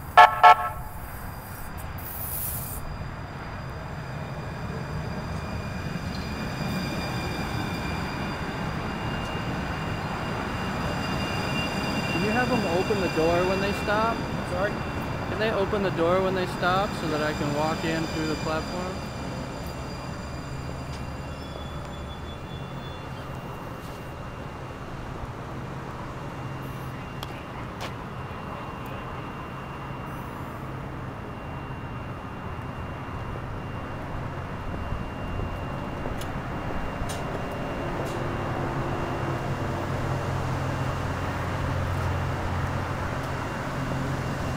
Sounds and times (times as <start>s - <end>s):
Train: 0.0s - 44.5s
Speech: 12.2s - 19.0s.